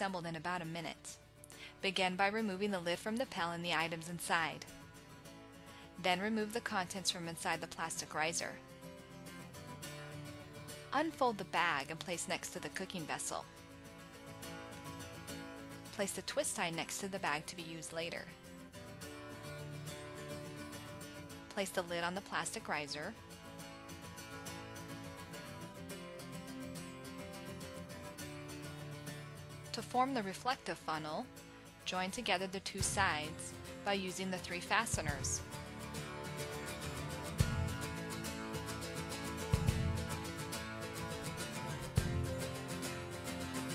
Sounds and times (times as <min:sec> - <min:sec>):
Speech: 0:00.0 - 0:01.2, 0:01.8 - 0:04.7, 0:06.0 - 0:08.6, 0:11.0 - 0:13.4, 0:16.0 - 0:18.3, 0:21.5 - 0:23.2, 0:29.8 - 0:31.3, 0:31.9 - 0:35.4.